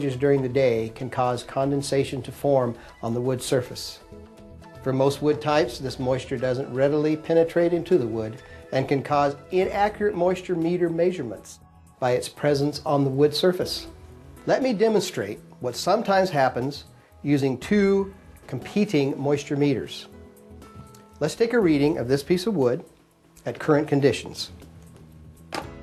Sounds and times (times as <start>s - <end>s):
Speech: 0.0s - 4.0s, 4.9s - 13.9s, 14.5s - 20.1s, 21.2s - 24.6s
Music: 0.0s - 25.8s.